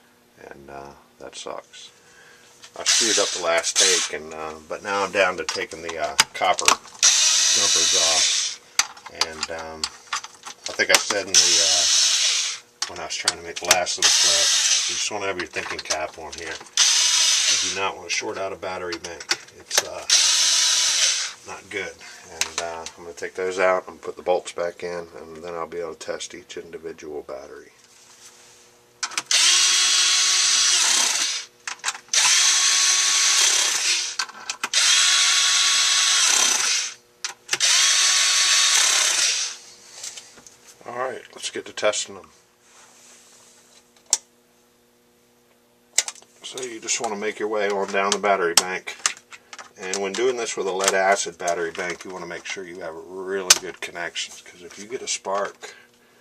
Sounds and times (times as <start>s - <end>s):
Power tool: 2.8s - 4.2s, 4.9s - 18.4s, 19.7s - 21.6s, 29.0s - 40.2s.